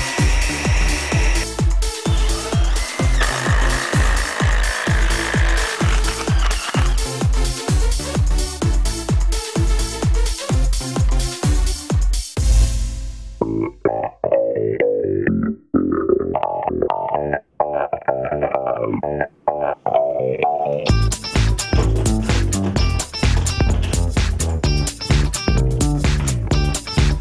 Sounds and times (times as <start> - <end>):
Music: 0.0 - 27.2.